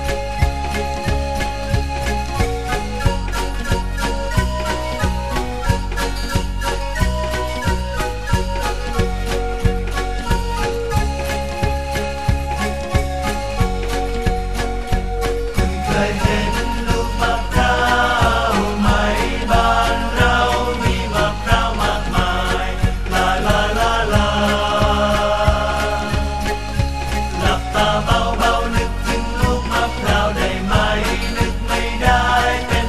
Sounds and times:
Funny music: 0:00.0 - 0:32.8.

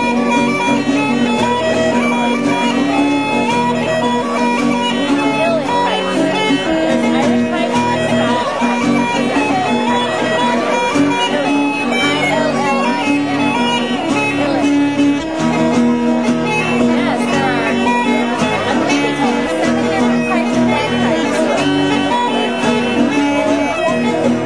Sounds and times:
Guitar: 0:00.0 - 0:24.4
Speech: 0:00.0 - 0:24.4.

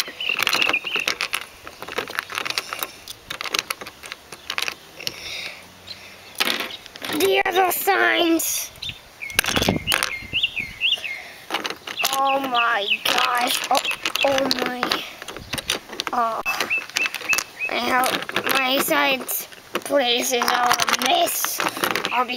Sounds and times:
Bird: 0:00.0 - 0:01.4, 0:08.1 - 0:15.8, 0:16.4 - 0:19.1
Speech: 0:07.1 - 0:08.7, 0:12.1 - 0:15.1, 0:16.1 - 0:16.6, 0:17.7 - 0:22.3.

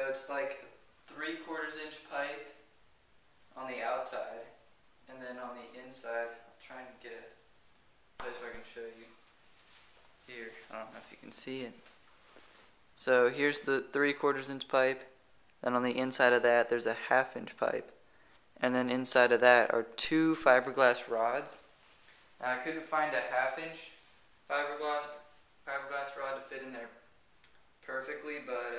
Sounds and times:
Speech: 0:00.0 - 0:02.6, 0:03.5 - 0:07.4, 0:08.2 - 0:09.2, 0:10.3 - 0:11.8, 0:13.0 - 0:18.0, 0:18.6 - 0:21.7, 0:22.4 - 0:27.1, 0:27.8 - 0:28.7.

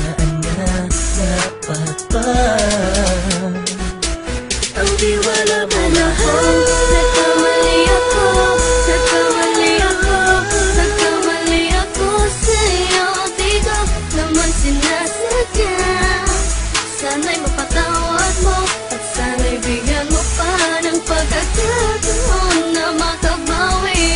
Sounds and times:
Music: 0:00.0 - 0:24.1.

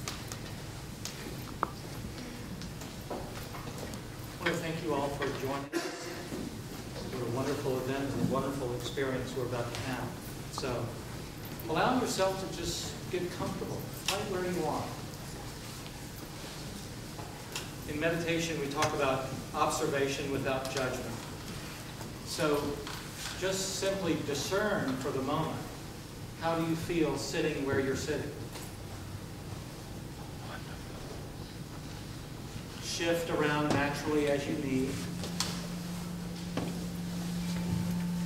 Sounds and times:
Speech: 0:04.4 - 0:06.3, 0:07.0 - 0:11.0, 0:11.7 - 0:15.1, 0:17.9 - 0:21.2, 0:22.3 - 0:25.8, 0:26.4 - 0:28.4, 0:32.8 - 0:35.2.

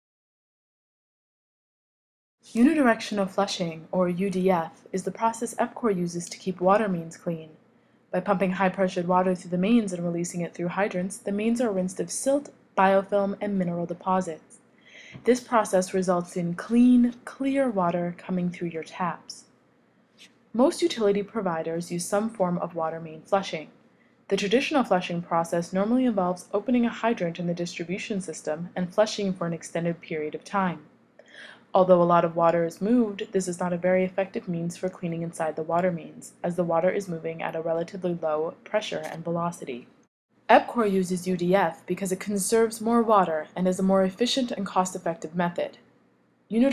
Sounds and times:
Speech: 0:02.5 - 0:07.6, 0:08.2 - 0:19.5, 0:20.6 - 0:23.7, 0:24.3 - 0:39.9, 0:40.5 - 0:45.8, 0:46.5 - 0:46.7.

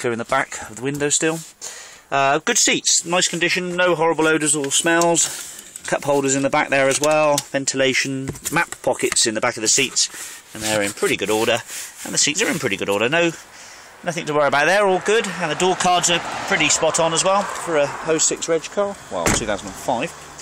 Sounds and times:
Speech: 0:00.0 - 0:01.5, 0:02.1 - 0:13.4, 0:14.0 - 0:20.2.

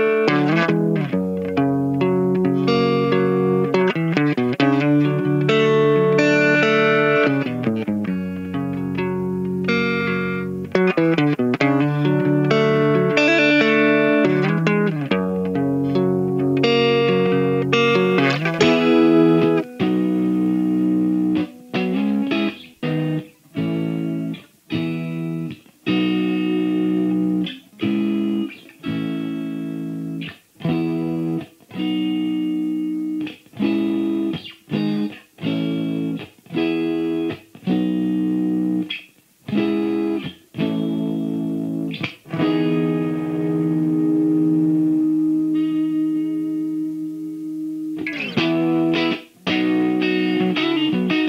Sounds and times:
Guitar: 0:00.0 - 0:51.2.

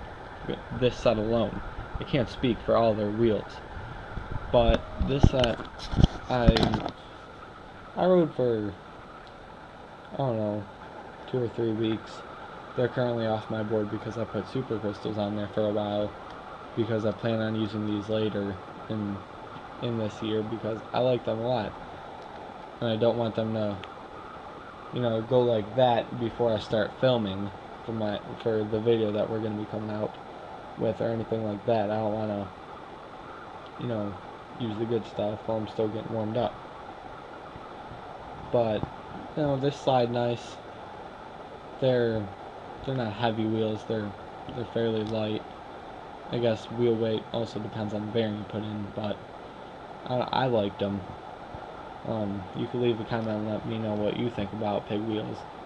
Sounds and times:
Speech: 0:00.5 - 0:03.6, 0:04.6 - 0:05.6, 0:06.3 - 0:06.9, 0:08.0 - 0:08.8, 0:10.1 - 0:10.7, 0:11.3 - 0:12.2, 0:12.8 - 0:16.1, 0:16.8 - 0:19.2, 0:19.8 - 0:21.7, 0:22.8 - 0:23.8, 0:25.0 - 0:30.1, 0:30.8 - 0:32.5, 0:33.8 - 0:36.6, 0:38.5 - 0:40.6, 0:41.8 - 0:45.4, 0:46.3 - 0:49.2, 0:50.1 - 0:51.1, 0:52.1 - 0:55.4.

